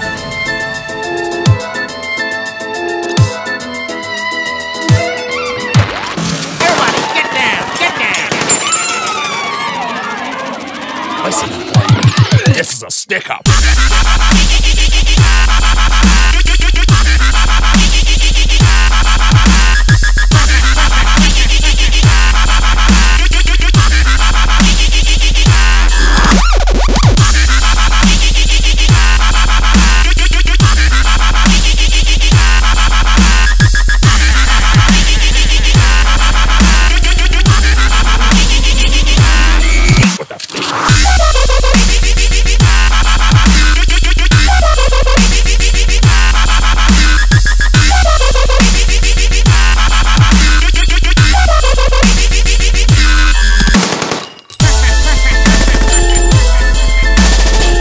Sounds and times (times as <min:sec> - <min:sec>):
Dubstep: 0:11.2 - 0:54.0, 0:54.6 - 0:57.8.